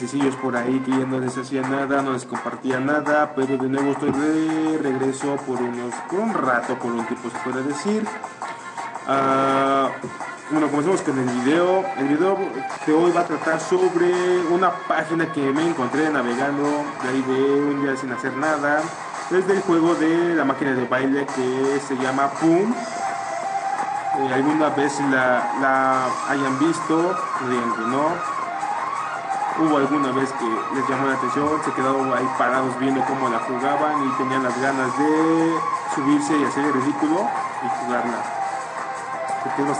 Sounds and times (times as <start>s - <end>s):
Speech: 0.0s - 8.2s, 9.1s - 22.8s, 24.2s - 28.2s, 29.6s - 38.3s, 39.4s - 39.7s
Music: 0.0s - 39.7s.